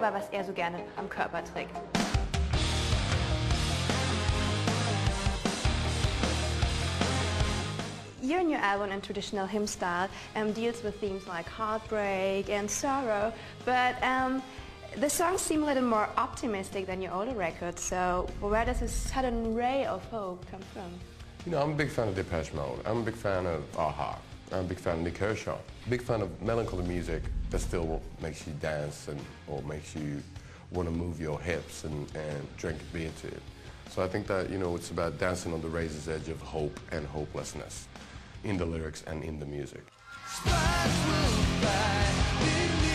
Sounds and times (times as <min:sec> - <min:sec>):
Music: 0:00.0 - 0:42.9.